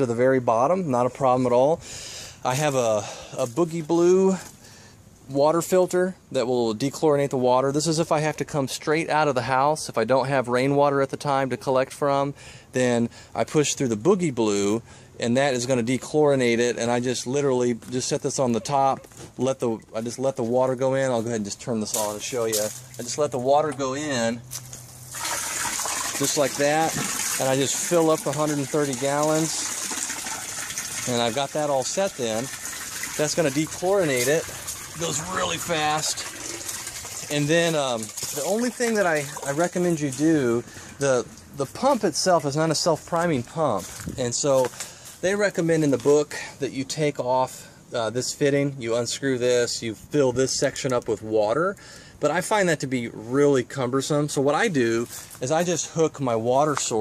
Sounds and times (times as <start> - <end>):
Water: 6.8 - 44.6, 45.4 - 57.0
Water tap, faucet: 25.1 - 39.3.